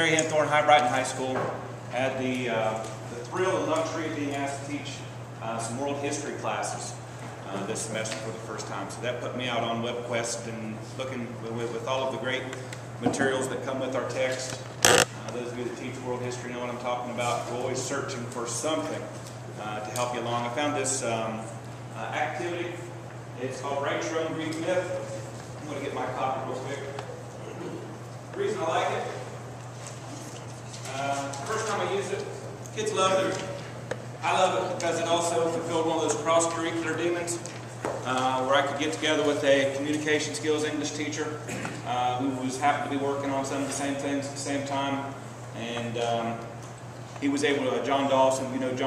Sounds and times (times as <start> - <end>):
Speech: 0.0 - 29.3, 30.8 - 46.5, 47.2 - 48.8.